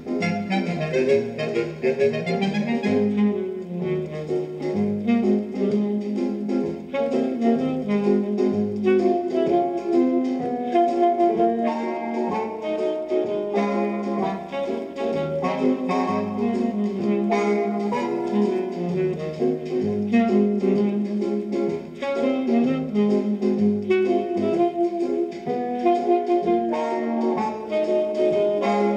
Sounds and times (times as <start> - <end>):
Background music: 0.0 - 28.9
Soundtrack music: 0.1 - 25.5.